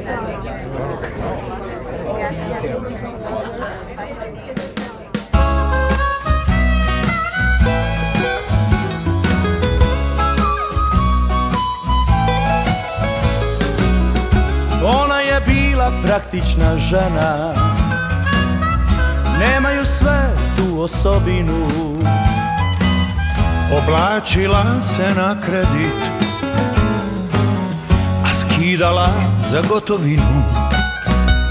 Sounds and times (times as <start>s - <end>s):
Speech: 0.0s - 5.4s
Music: 4.9s - 31.5s.